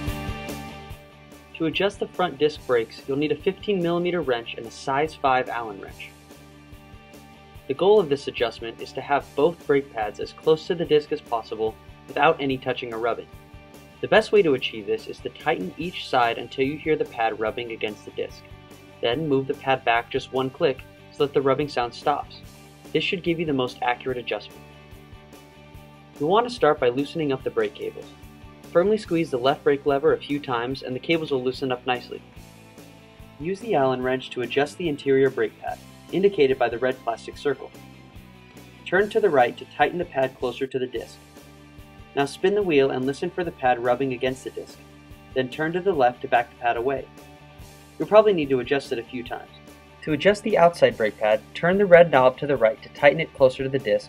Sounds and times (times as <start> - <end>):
Music: 0.0 - 54.0
Speech: 1.6 - 6.1, 7.7 - 13.3, 14.0 - 24.6, 26.2 - 32.2, 33.4 - 37.8, 38.9 - 41.2, 42.2 - 47.1, 48.0 - 54.0.